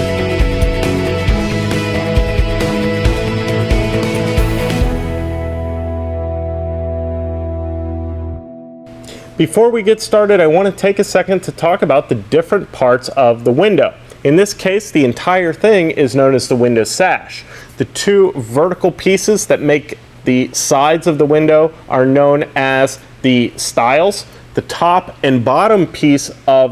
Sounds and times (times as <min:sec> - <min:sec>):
Speech: 0:09.4 - 0:26.7.